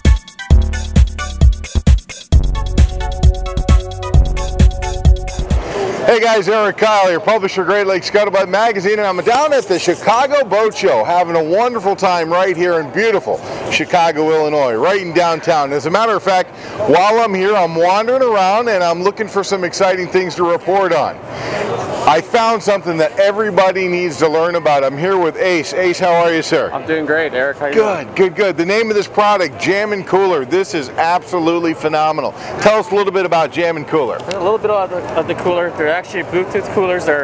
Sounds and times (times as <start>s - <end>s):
Music: 0.0s - 5.8s
Speech: 6.0s - 21.2s, 22.1s - 37.2s.